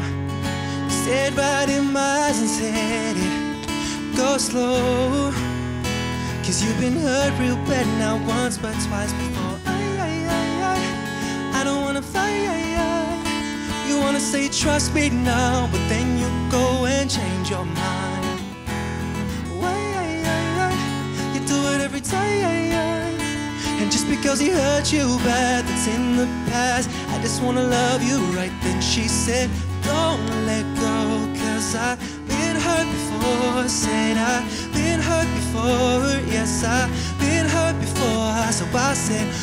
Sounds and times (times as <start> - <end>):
Music: 0.0 - 39.4.